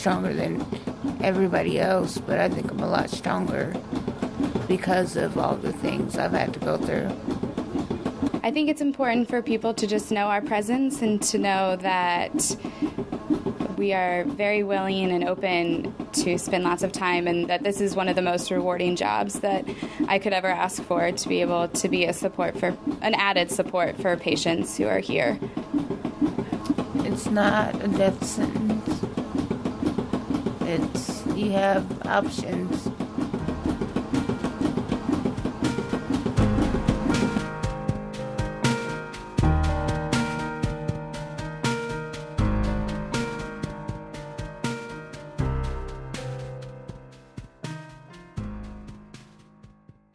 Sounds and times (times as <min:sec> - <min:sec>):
Background music: 0:00.0 - 0:50.1.